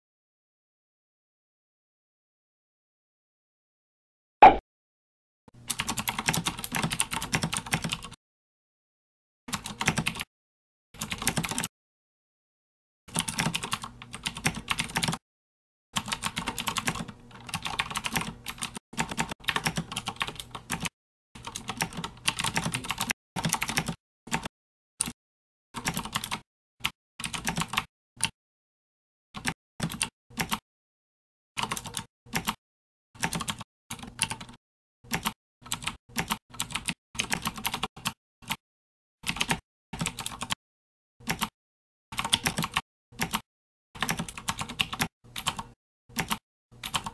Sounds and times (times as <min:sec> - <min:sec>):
Typing: 0:05.7 - 0:08.2, 0:09.5 - 0:10.3, 0:11.0 - 0:11.7, 0:13.1 - 0:15.2, 0:16.0 - 0:25.2, 0:25.8 - 0:28.3, 0:29.4 - 0:30.6, 0:31.6 - 0:32.6, 0:33.2 - 0:38.6, 0:39.2 - 0:40.6, 0:41.2 - 0:41.5, 0:42.2 - 0:43.4, 0:44.0 - 0:47.1.